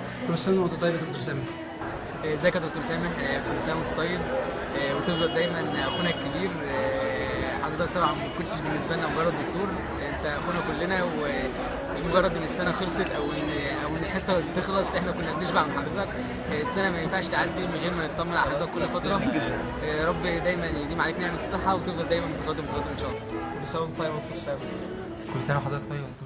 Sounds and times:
Music: 0.0 - 26.2.

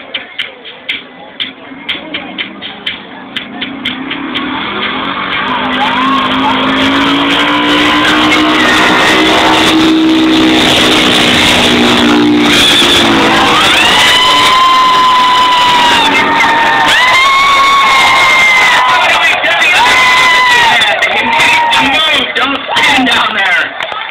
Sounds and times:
Vehicle: 0.0 - 24.1
Speech: 20.8 - 23.8.

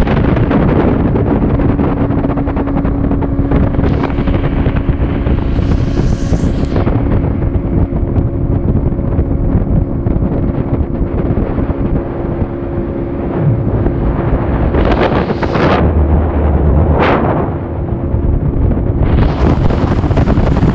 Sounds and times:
Motorboat, speedboat: 0.0 - 20.7.

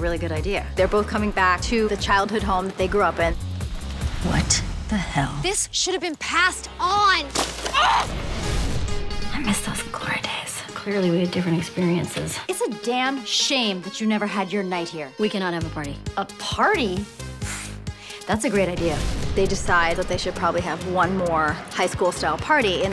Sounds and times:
Music: 0.0 - 22.9.

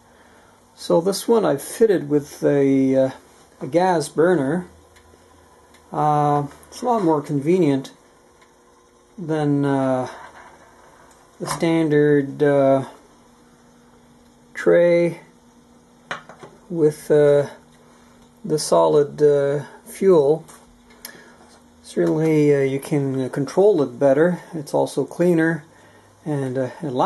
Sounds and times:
Speech: 0.8 - 4.8, 5.9 - 8.0, 9.2 - 10.3, 11.4 - 13.0, 14.6 - 15.3, 16.7 - 17.6, 18.4 - 20.6, 21.8 - 27.0.

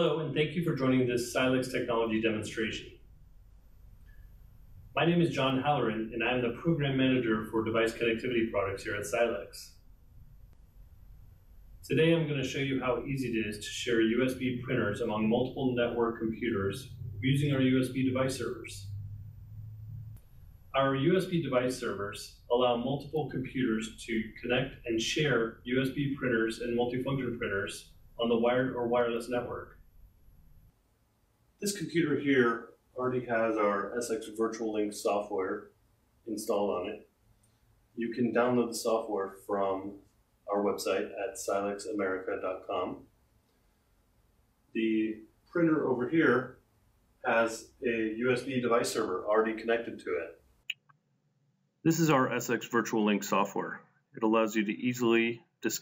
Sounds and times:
Speech: 0.0 - 2.9, 5.0 - 9.7, 11.8 - 18.8, 20.8 - 29.7, 31.6 - 35.7, 36.3 - 37.0, 38.0 - 43.0, 44.8 - 46.5, 47.2 - 50.4, 51.9 - 55.8.

